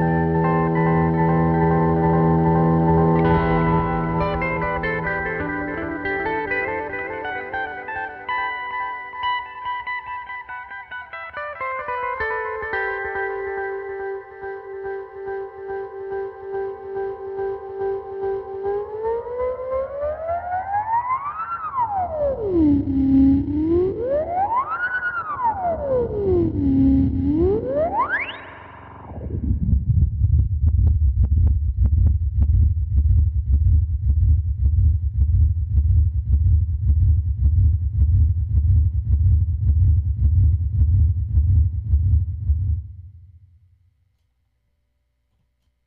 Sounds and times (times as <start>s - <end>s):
Music: 0.0s - 29.6s
Effects unit: 0.0s - 45.8s.